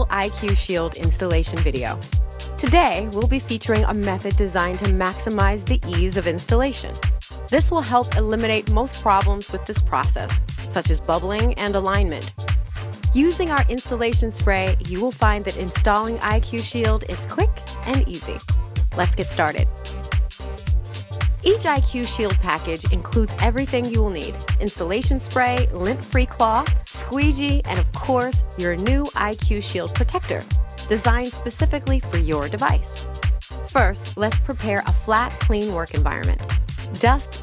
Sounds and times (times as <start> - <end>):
Speech: 0.0 - 2.0, 2.6 - 12.3, 13.2 - 18.4, 19.0 - 19.7, 21.4 - 33.0, 33.7 - 37.4
Music: 0.0 - 37.4.